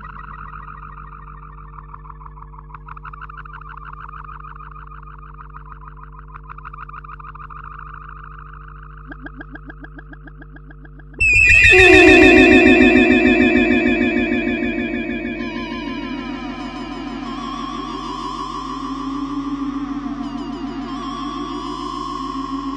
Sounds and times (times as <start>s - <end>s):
Sound effect: 11.2s - 17.6s.